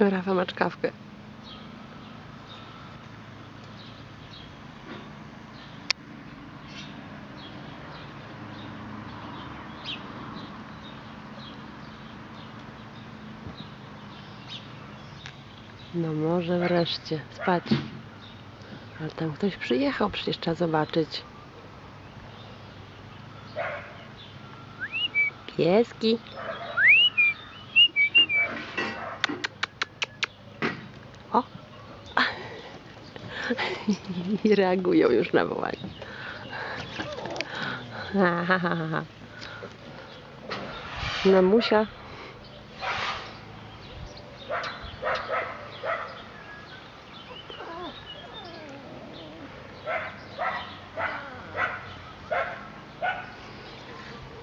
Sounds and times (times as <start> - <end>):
Chirp, tweet: 6.6 - 17.1, 19.5 - 28.6, 42.4 - 54.4.